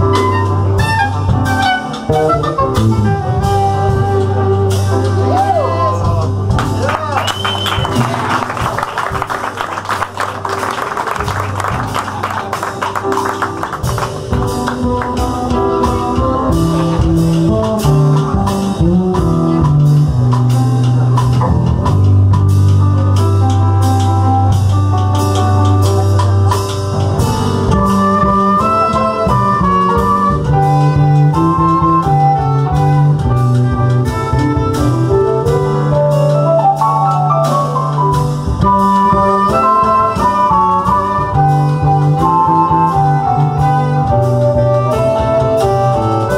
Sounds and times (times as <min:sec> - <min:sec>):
Drum kit: 0:00.0 - 0:46.3.